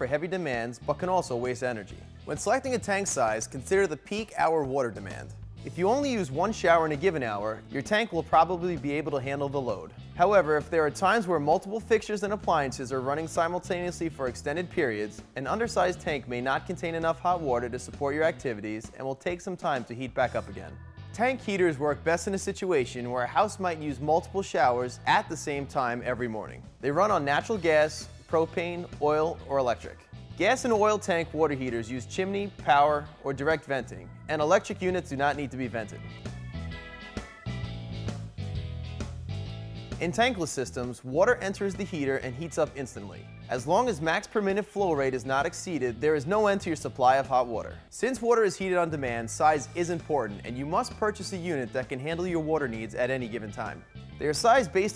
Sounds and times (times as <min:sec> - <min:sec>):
Speech: 0:00.0 - 0:36.1, 0:40.0 - 0:54.9
Music: 0:00.0 - 0:54.9.